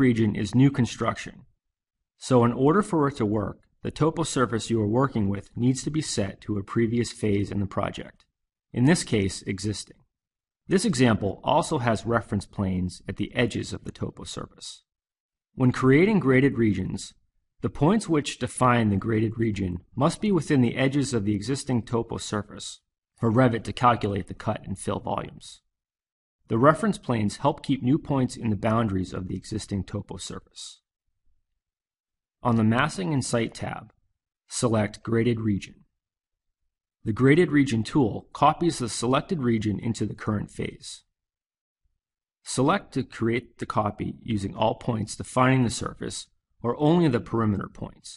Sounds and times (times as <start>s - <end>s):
Speech: 0.0s - 1.5s, 2.2s - 10.1s, 10.7s - 14.9s, 15.6s - 25.7s, 26.5s - 30.9s, 32.4s - 35.9s, 37.0s - 41.1s, 42.5s - 48.1s.